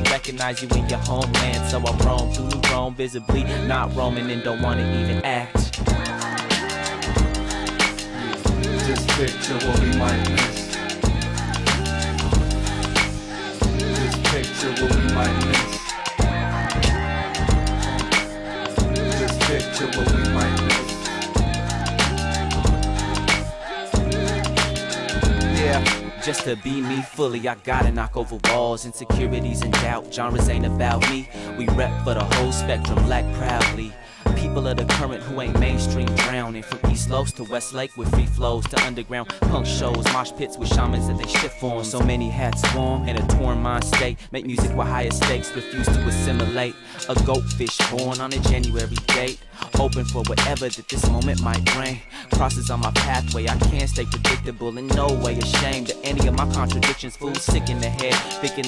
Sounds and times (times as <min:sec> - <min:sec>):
Hip hop music: 0:00.0 - 0:58.6
Rapping: 0:00.0 - 0:58.6.